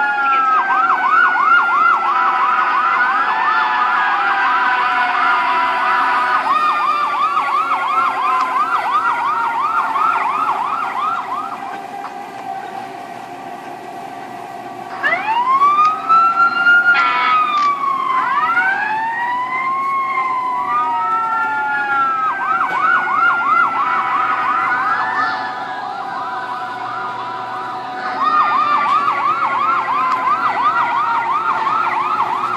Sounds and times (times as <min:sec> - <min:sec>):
Emergency vehicle: 0:00.0 - 0:32.5.